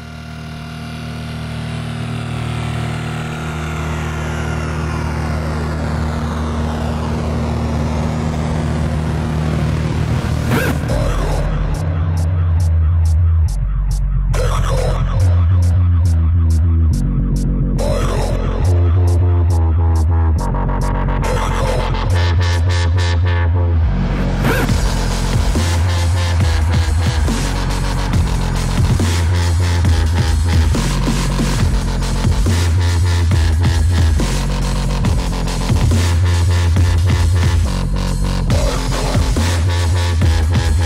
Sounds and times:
Dubstep: 0:00.0 - 0:40.8.

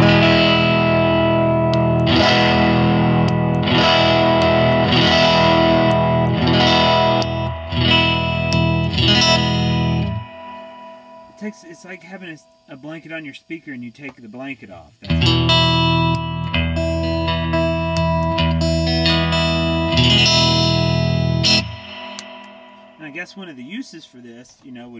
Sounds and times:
Effects unit: 0:00.0 - 0:24.4
Distortion: 0:00.0 - 0:24.9
Guitar: 0:00.0 - 0:24.9
Speech: 0:11.4 - 0:15.1, 0:23.0 - 0:24.9.

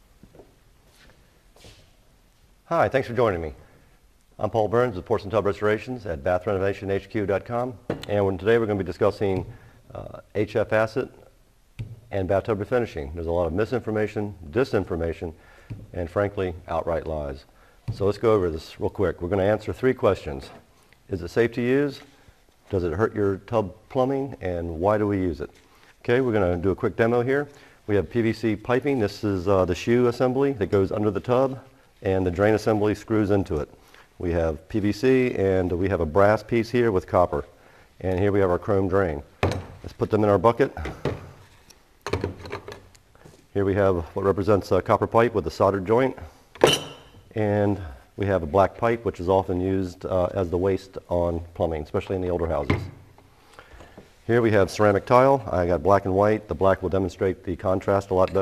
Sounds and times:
Speech: 0:02.7 - 0:03.6, 0:04.4 - 0:11.3, 0:12.1 - 0:22.1, 0:22.7 - 0:40.9, 0:43.5 - 0:46.3, 0:47.3 - 0:53.0, 0:54.3 - 0:58.4.

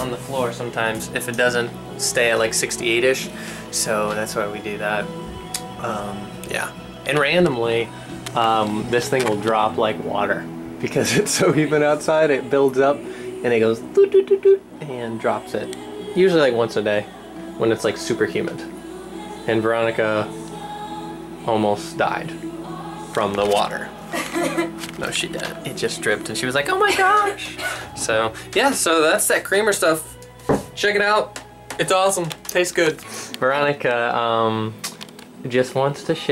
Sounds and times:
Music: 0:00.0 - 0:36.3
Speech: 0:05.8 - 0:14.2, 0:23.2 - 0:23.9, 0:25.0 - 0:30.1, 0:35.4 - 0:36.3.

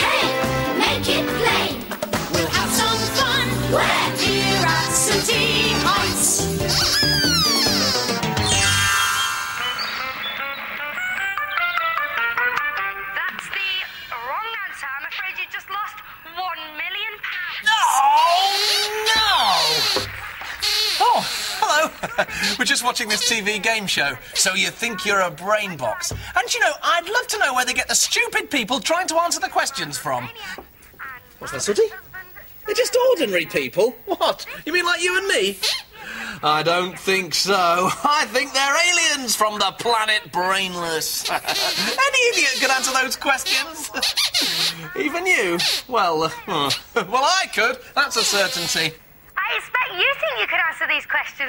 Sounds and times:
Music: 0:00.0 - 0:14.2.

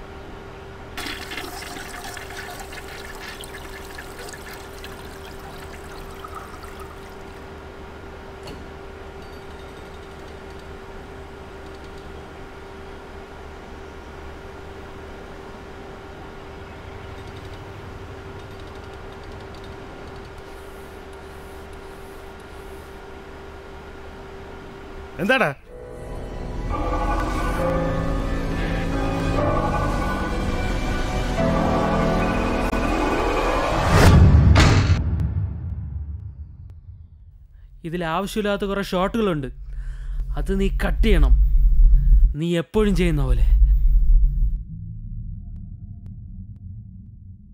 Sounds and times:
Speech: 0:25.2 - 0:25.7, 0:37.8 - 0:39.6, 0:40.3 - 0:41.4, 0:42.3 - 0:43.6.

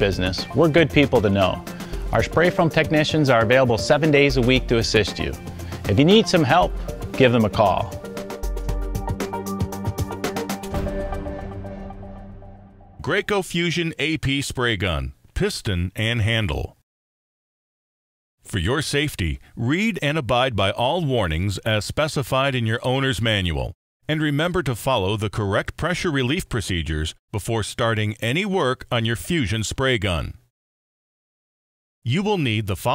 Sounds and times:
Speech: 0:00.0 - 0:08.0, 0:13.0 - 0:16.8, 0:18.5 - 0:30.4, 0:32.1 - 0:32.9
Music: 0:00.0 - 0:13.0.

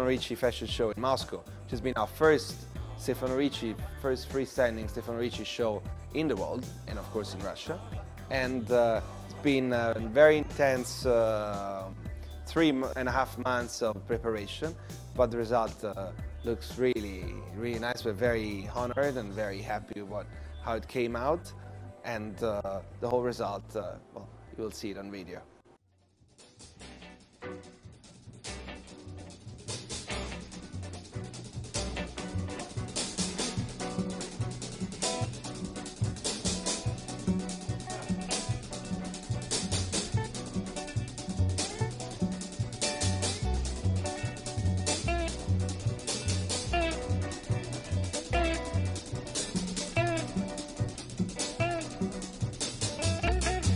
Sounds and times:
Jazz: 0:26.5 - 0:53.7.

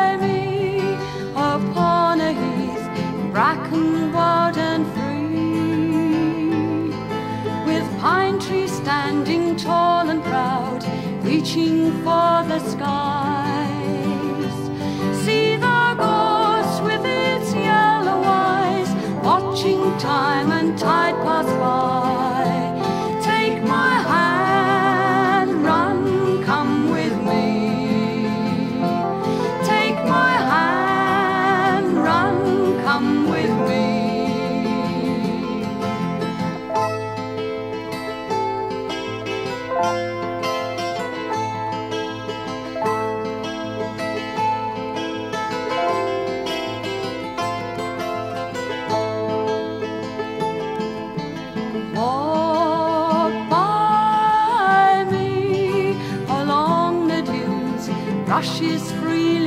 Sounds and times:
Music: 0:00.0 - 0:59.4.

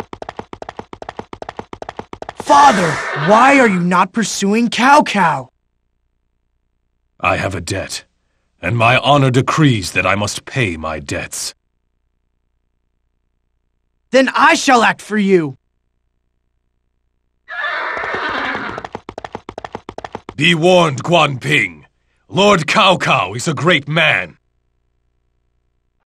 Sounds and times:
Speech: 0:02.4 - 0:05.5, 0:07.2 - 0:11.6, 0:14.1 - 0:15.6, 0:20.4 - 0:24.4.

